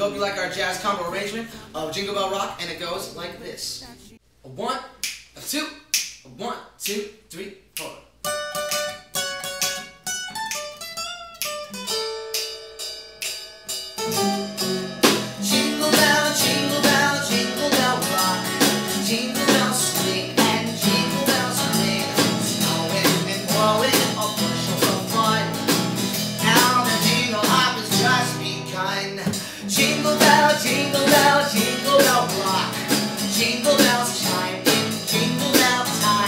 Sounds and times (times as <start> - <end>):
Speech: 0.0 - 8.1
Music: 8.2 - 36.2.